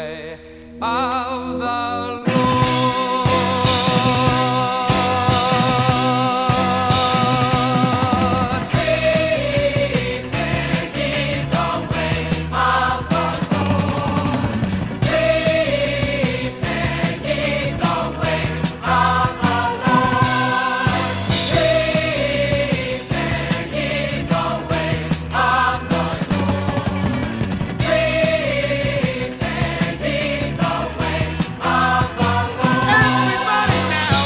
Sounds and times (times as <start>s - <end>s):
Independent music: 0.0s - 34.2s.